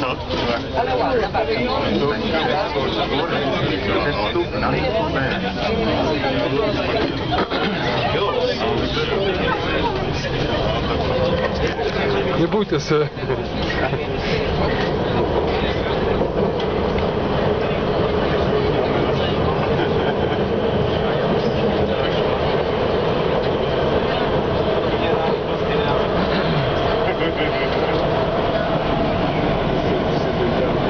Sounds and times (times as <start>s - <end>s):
Railroad car, train wagon: 0.0s - 30.9s
Subway, metro, underground: 0.0s - 30.9s
Train: 0.0s - 30.9s.